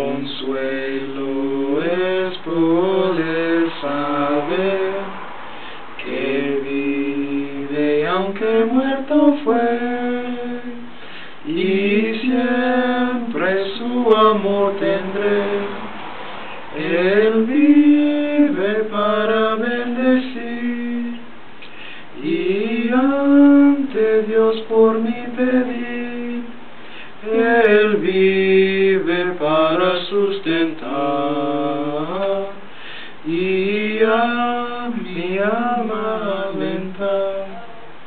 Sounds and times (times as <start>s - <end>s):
Male singing: 0.0s - 5.2s, 6.0s - 16.0s, 16.8s - 21.3s, 22.2s - 26.6s, 27.2s - 32.6s, 33.2s - 37.9s.